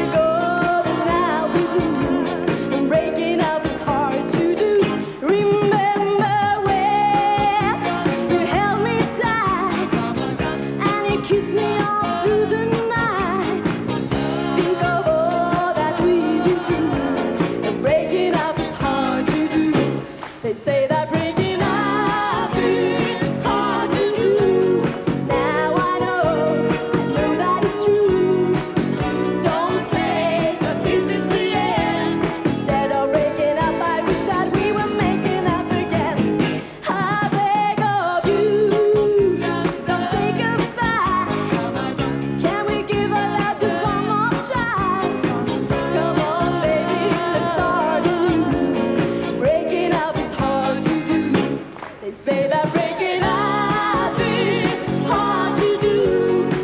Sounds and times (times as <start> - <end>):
Music: 0.0 - 56.6.